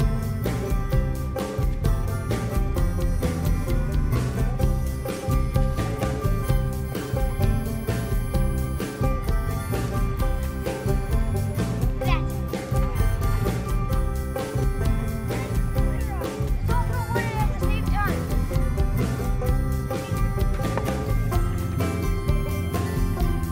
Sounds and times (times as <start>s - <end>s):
Music: 0.0s - 23.5s
Speech: 15.2s - 18.3s, 19.8s - 20.8s.